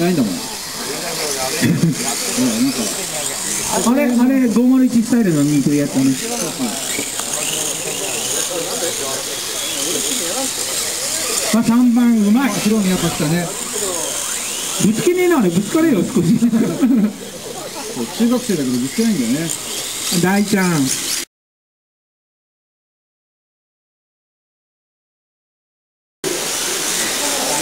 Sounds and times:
Speech: 0:00.0 - 0:21.0.

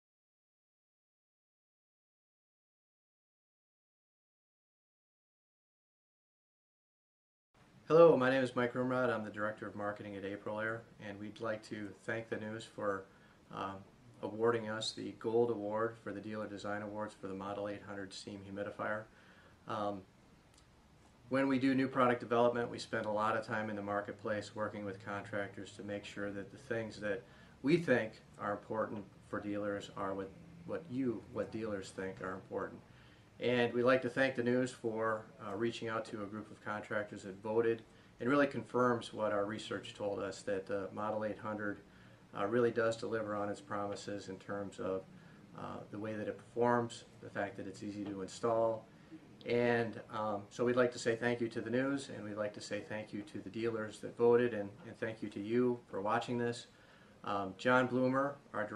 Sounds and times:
Speech: 0:07.9 - 0:19.1, 0:19.7 - 0:20.1, 0:21.3 - 0:32.8, 0:33.4 - 0:58.7.

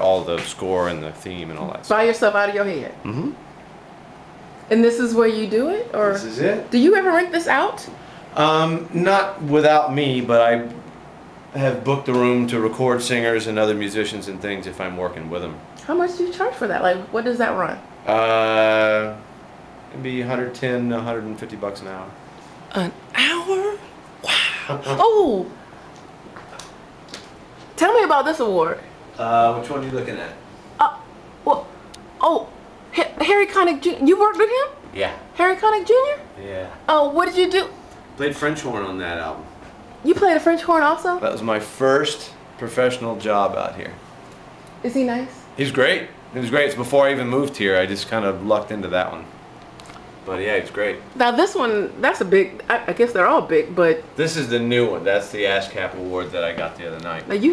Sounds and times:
Inside, small room: 0:00.0 - 0:57.5.

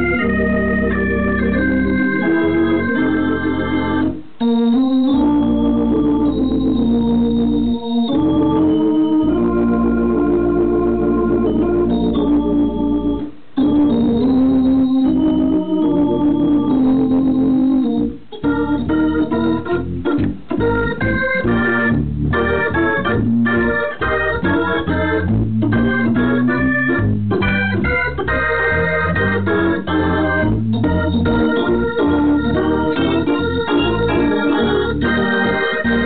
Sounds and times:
Music: 0:00.0 - 0:36.0.

